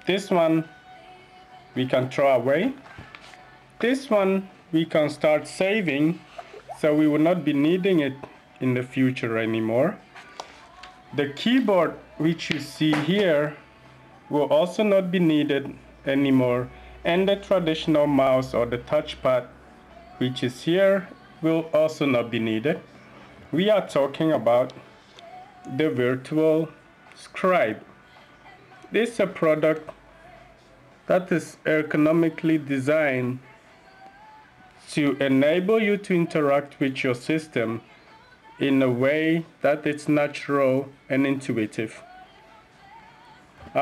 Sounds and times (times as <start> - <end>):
Speech: 0.0 - 0.7, 1.8 - 2.8, 3.8 - 10.0, 11.1 - 13.6, 14.3 - 19.5, 20.2 - 22.9, 23.5 - 24.8, 25.7 - 27.9, 28.9 - 29.9, 31.1 - 33.4, 34.8 - 37.8, 38.6 - 42.1.